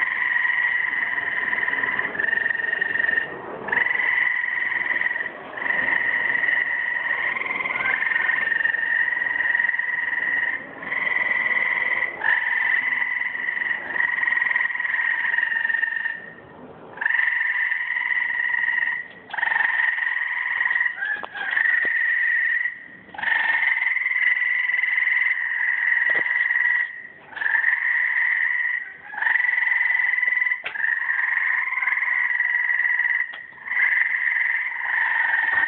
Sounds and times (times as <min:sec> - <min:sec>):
Bird: 0:17.0 - 0:32.4.